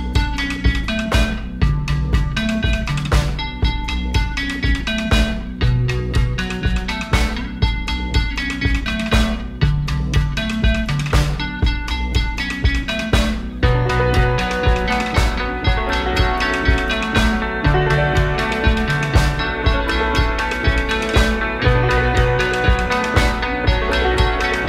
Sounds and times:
Background music: 0:00.0 - 0:24.6.

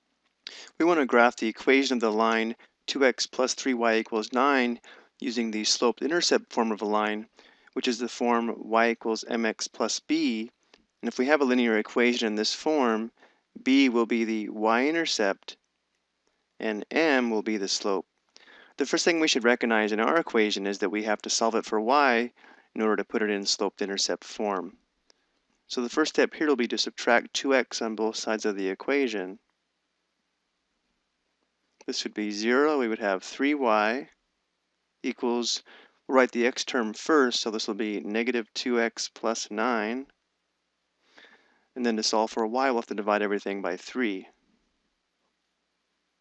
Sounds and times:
Speech: 0:00.5 - 0:15.6, 0:16.6 - 0:18.0, 0:18.8 - 0:24.7, 0:25.7 - 0:29.4, 0:31.9 - 0:34.1, 0:35.1 - 0:40.1, 0:41.8 - 0:44.3.

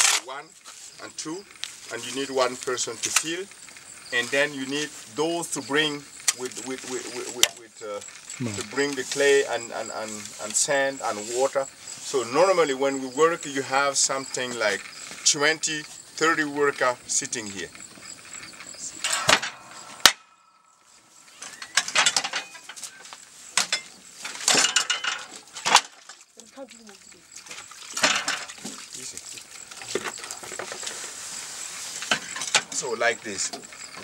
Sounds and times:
Outside, rural or natural: 0:00.0 - 0:34.0
Speech: 0:04.2 - 0:17.7, 0:32.8 - 0:34.0.

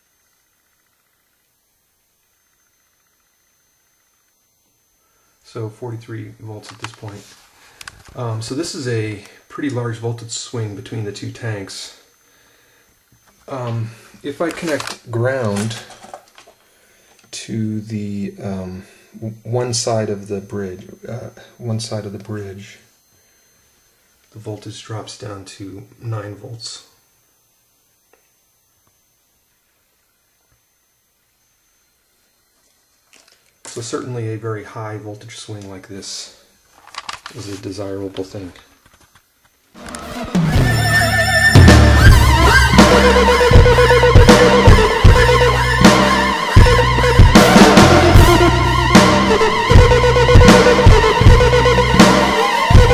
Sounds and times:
Inside, small room: 0:00.0 - 0:52.9
Speech: 0:05.4 - 0:07.3, 0:08.2 - 0:12.0, 0:13.5 - 0:15.9, 0:17.3 - 0:22.9, 0:24.3 - 0:27.0, 0:33.7 - 0:36.4, 0:37.3 - 0:38.7.

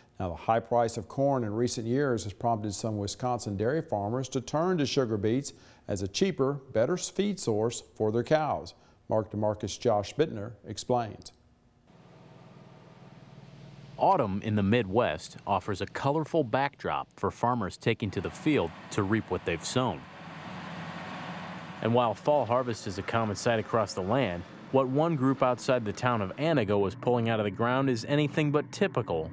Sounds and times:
Speech: 0:00.2 - 0:11.4, 0:14.0 - 0:20.1, 0:21.8 - 0:29.3.

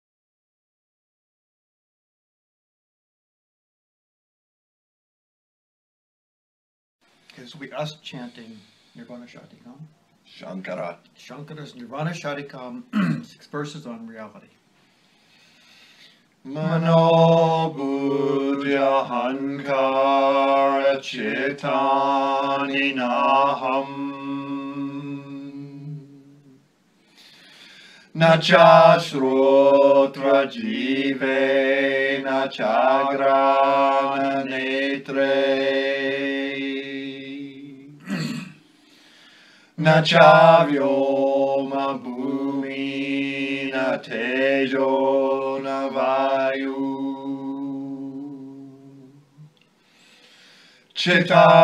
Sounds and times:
Mantra: 0:16.4 - 0:26.6, 0:28.1 - 0:38.4, 0:39.8 - 0:49.5, 0:51.0 - 0:51.6.

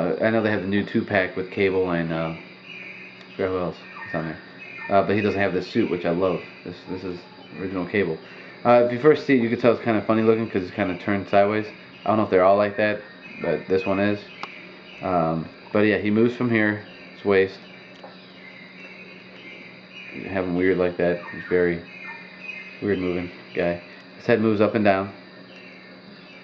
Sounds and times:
Speech: 0:00.0 - 0:02.4, 0:03.4 - 0:14.3, 0:15.0 - 0:17.6, 0:20.2 - 0:21.8, 0:22.8 - 0:25.2.

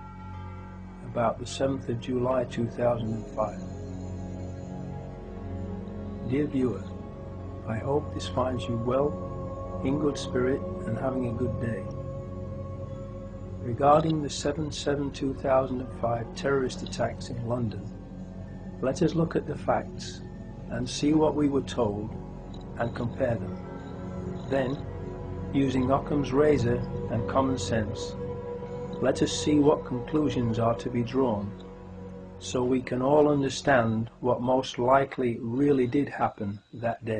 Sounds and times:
Speech: 0:01.0 - 0:03.6, 0:06.2 - 0:06.9, 0:07.7 - 0:09.2, 0:09.8 - 0:11.9, 0:13.7 - 0:17.9, 0:18.8 - 0:22.1, 0:22.8 - 0:23.5, 0:24.5 - 0:24.8, 0:25.6 - 0:28.1, 0:29.0 - 0:31.6, 0:32.4 - 0:37.1.

